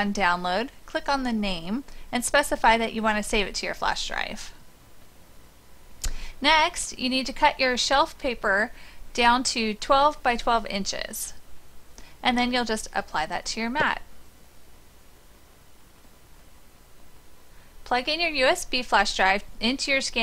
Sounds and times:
Speech: 0.0 - 4.6, 6.4 - 11.4, 12.2 - 14.1, 17.9 - 20.2.

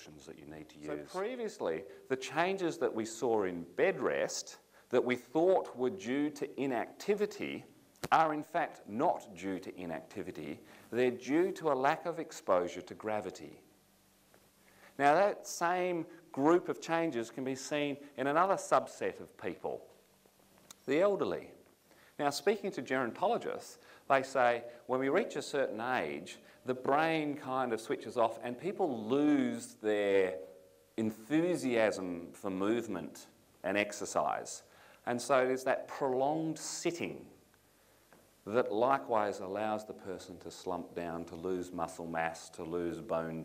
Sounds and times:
Speech: 0.0 - 13.7, 15.0 - 19.9, 20.7 - 21.6, 22.2 - 37.4, 38.4 - 43.4.

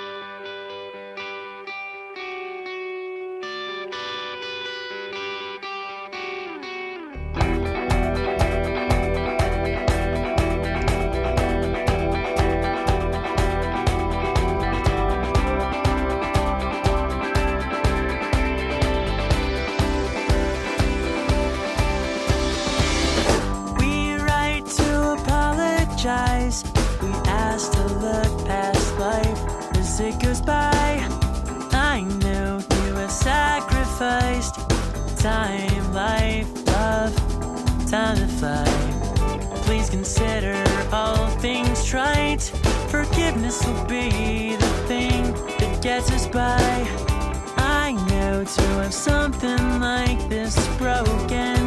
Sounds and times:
Music: 0.0 - 51.6.

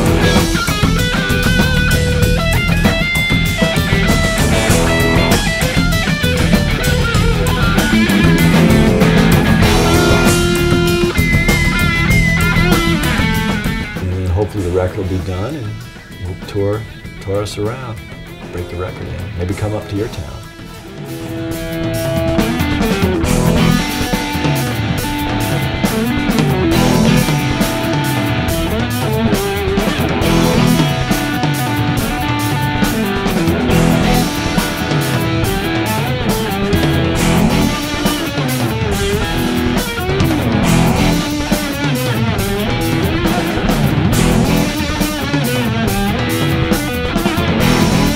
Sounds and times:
Drum: 0.0 - 14.3, 20.6 - 48.1
Bass guitar: 0.0 - 48.1
Heavy metal: 0.0 - 48.1
Progressive rock: 0.0 - 48.1.

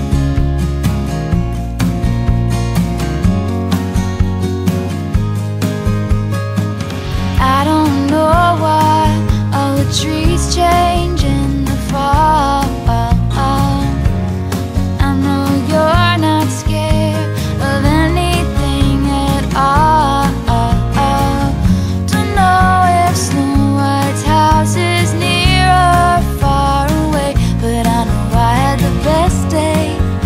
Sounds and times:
Music: 0.0 - 30.2.

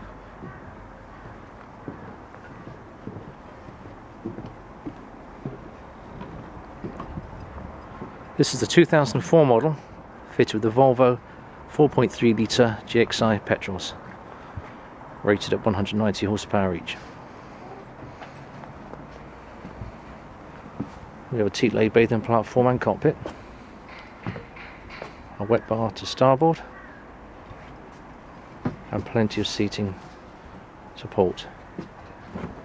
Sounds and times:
Speech: 8.4 - 14.0, 15.2 - 17.1, 21.3 - 23.3, 25.4 - 26.7, 28.9 - 30.0, 31.0 - 31.6.

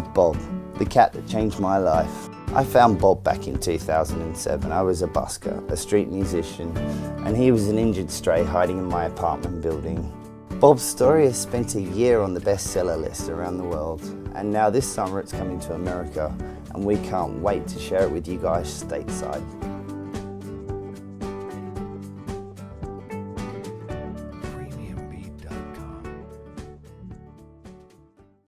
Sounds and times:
Speech: 0.0 - 19.5, 24.4 - 25.8
Music: 0.0 - 28.4.

